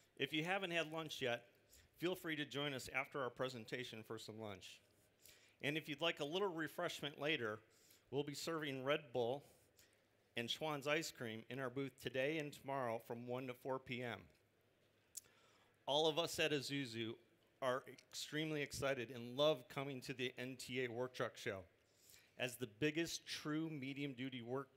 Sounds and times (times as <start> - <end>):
Speech: 0.2 - 4.8, 5.6 - 9.5, 10.4 - 14.4, 15.9 - 21.7, 22.4 - 24.7.